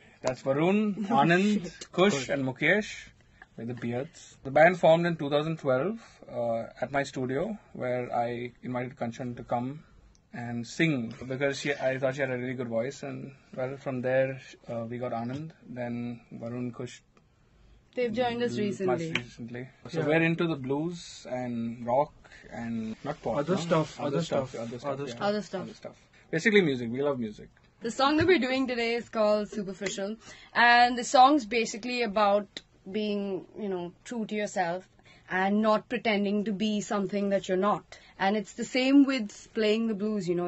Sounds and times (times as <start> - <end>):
Speech: 18.0 - 25.8.